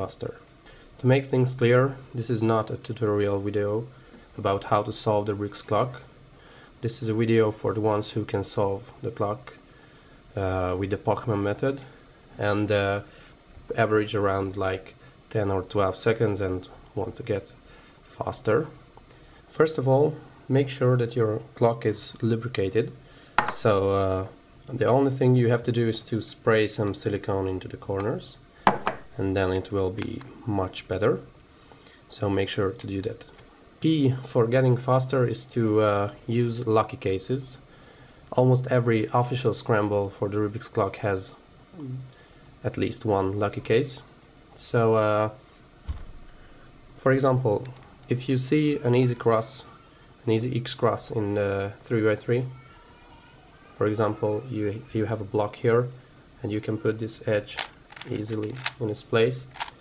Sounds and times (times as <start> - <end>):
Speech: 0.0 - 6.1, 6.8 - 9.6, 10.4 - 13.1, 13.7 - 18.8, 19.5 - 28.4, 29.2 - 31.3, 32.1 - 37.6, 38.3 - 45.4, 47.0 - 52.6, 53.7 - 59.5.